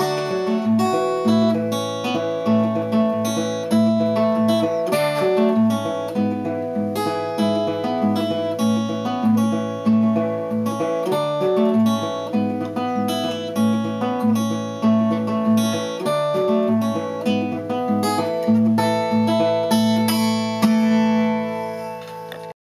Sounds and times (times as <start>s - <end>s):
Music: 0.0s - 22.6s.